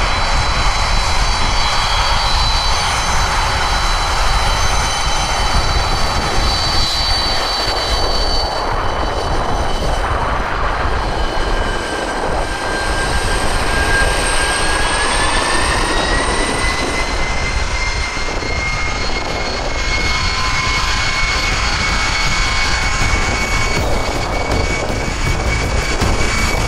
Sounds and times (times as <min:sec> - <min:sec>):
Aircraft engine: 0:00.0 - 0:26.6
Fixed-wing aircraft, airplane: 0:00.0 - 0:26.6
Outside, urban or manmade: 0:00.0 - 0:26.6.